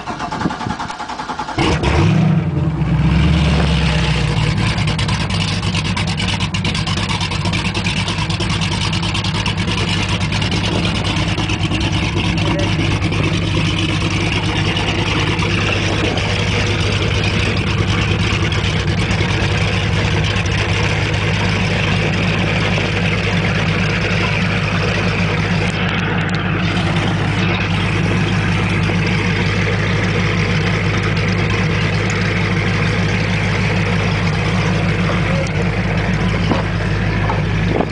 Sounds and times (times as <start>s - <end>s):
Motorboat, speedboat: 1.5s - 37.9s.